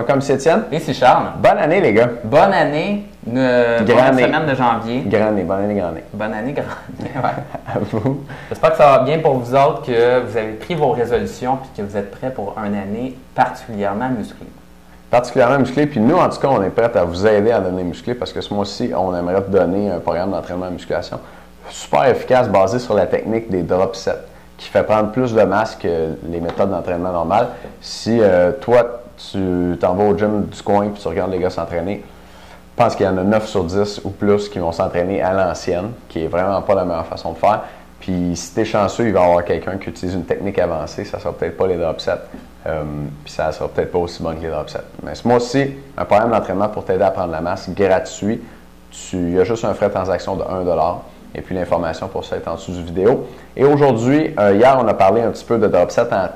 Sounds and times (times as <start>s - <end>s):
Speech: 0.0s - 32.1s, 32.8s - 56.3s.